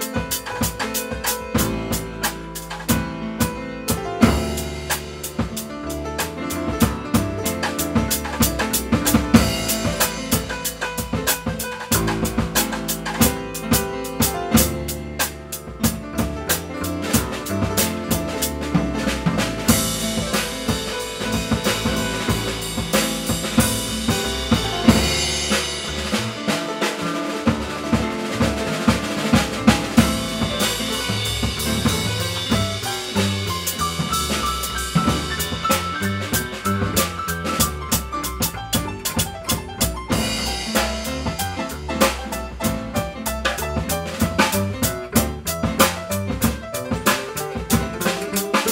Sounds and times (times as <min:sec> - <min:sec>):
Double bass: 0:00.0 - 0:48.7.